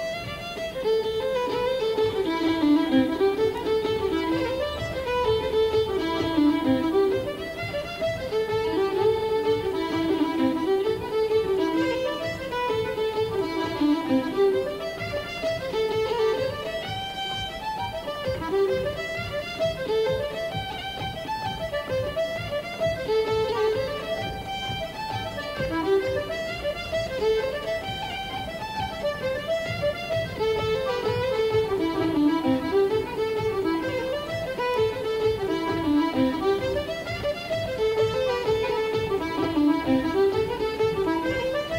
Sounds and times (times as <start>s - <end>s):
Bowed string instrument: 0.0s - 41.7s
Folk music: 0.0s - 41.7s.